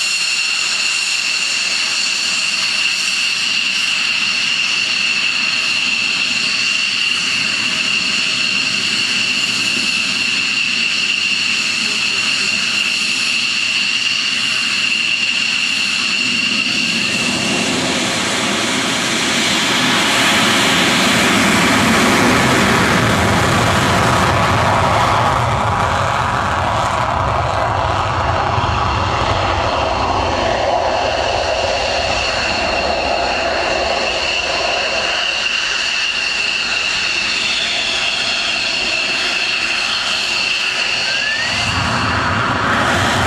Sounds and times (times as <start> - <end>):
Aircraft engine: 0.0 - 43.2
Fixed-wing aircraft, airplane: 0.0 - 43.2
Outside, rural or natural: 0.0 - 43.2.